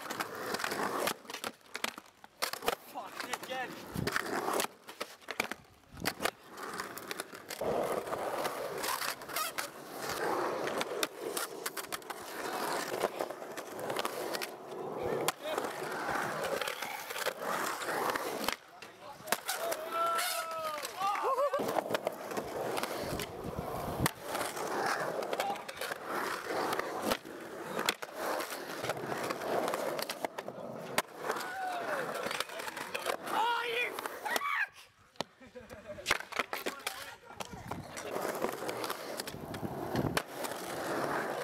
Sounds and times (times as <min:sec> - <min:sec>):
Skateboard: 0:00.0 - 0:41.4.